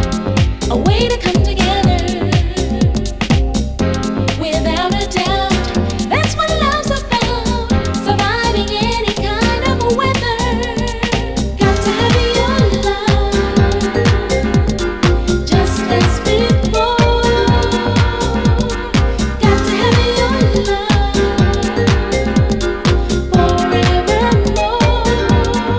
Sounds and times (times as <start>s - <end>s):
Disco: 0.0s - 25.7s
Electronic music: 0.0s - 25.7s.